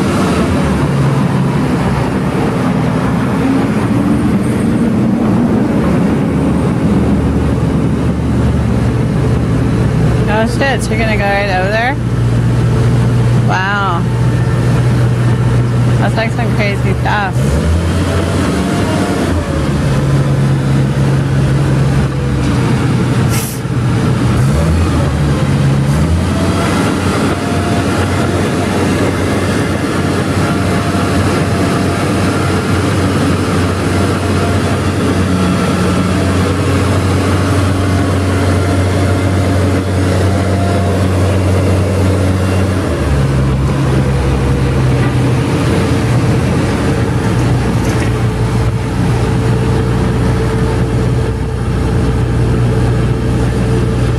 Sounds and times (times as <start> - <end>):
Propeller, airscrew: 0.0 - 10.9, 14.1 - 54.1.